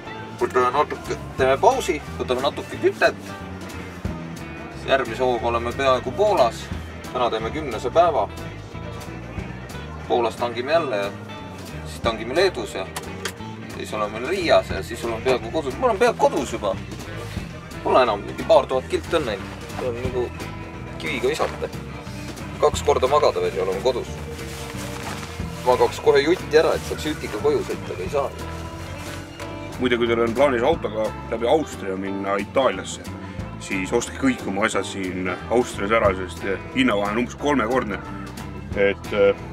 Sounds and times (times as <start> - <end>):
Music: 0.0 - 39.5
Speech: 0.4 - 3.2, 4.8 - 8.4, 10.1 - 11.2, 13.8 - 16.8, 17.8 - 20.3, 21.0 - 21.7, 22.6 - 24.2, 25.6 - 28.4, 29.8 - 38.0.